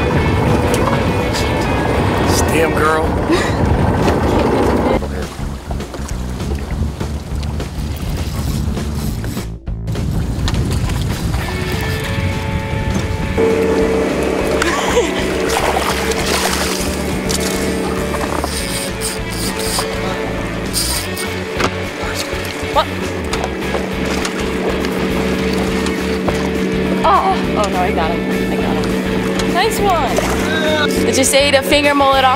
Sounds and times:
Music: 0.0s - 32.3s.

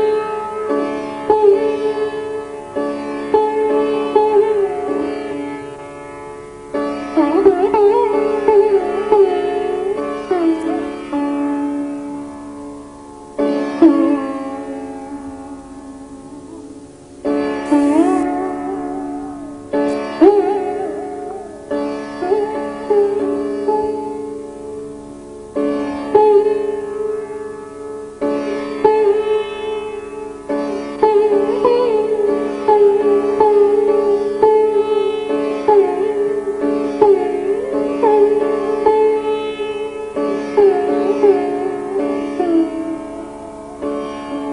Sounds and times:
Bowed string instrument: 0.0s - 44.5s.

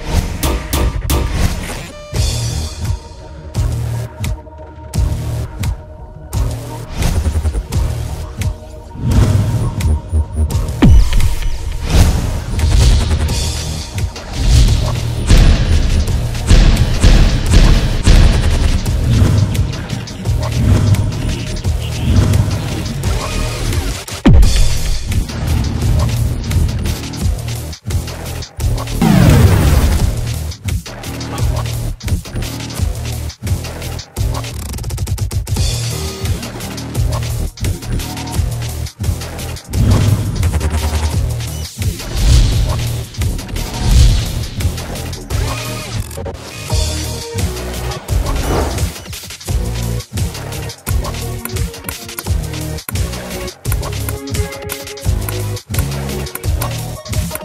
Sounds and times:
Music: 0.0s - 57.4s.

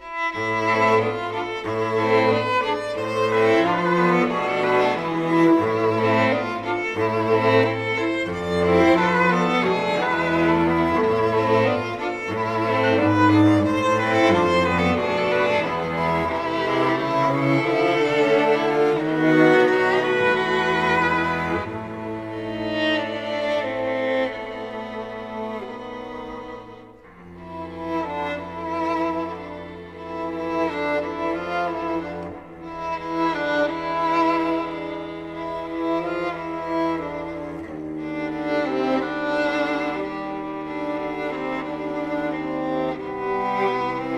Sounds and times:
Music: 0.0s - 44.1s.

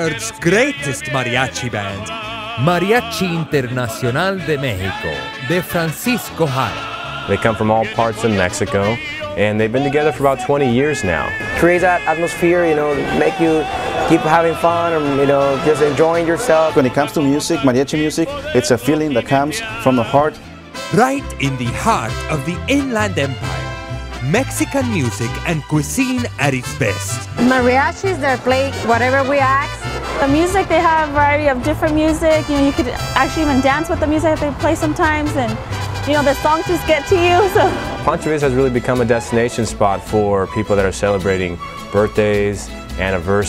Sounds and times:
Speech: 0.0s - 23.4s, 24.2s - 29.6s, 36.1s - 43.4s
Music: 0.0s - 43.4s.

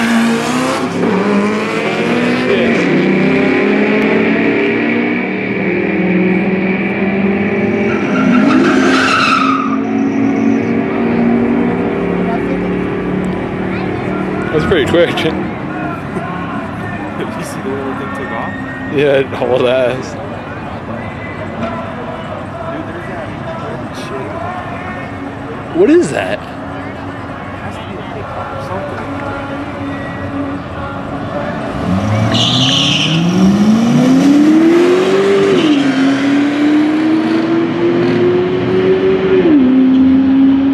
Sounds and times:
Skidding: 0.0s - 25.7s
Race car, auto racing: 0.0s - 40.7s.

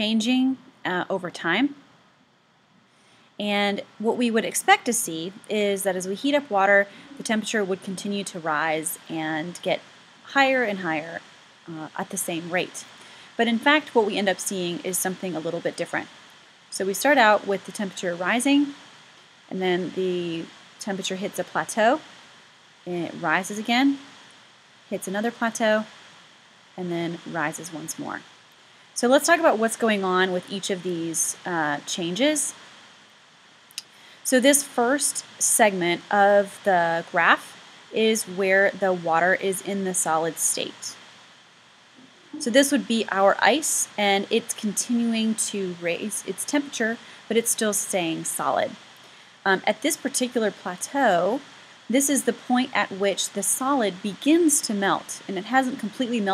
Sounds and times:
Speech: 0.0s - 1.8s, 3.4s - 16.1s, 16.8s - 18.8s, 19.5s - 22.0s, 22.9s - 24.0s, 24.9s - 25.9s, 26.8s - 28.2s, 29.0s - 32.6s, 34.3s - 41.0s, 42.4s - 48.8s, 49.5s - 56.3s
Waterfall: 6.3s - 33.1s.

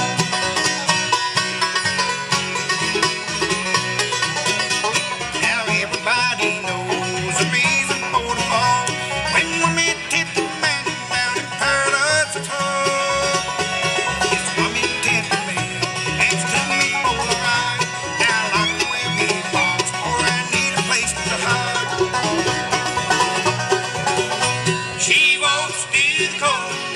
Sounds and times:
Bluegrass: 0.0s - 26.9s.

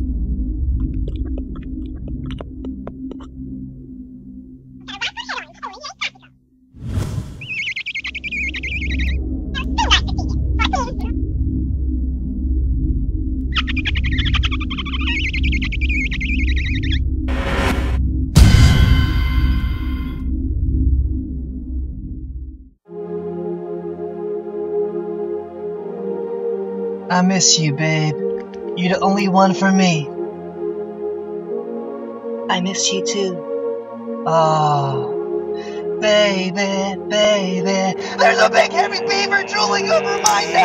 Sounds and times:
Music: 0.0s - 6.7s, 8.3s - 40.6s
Sonar: 18.4s - 20.3s.

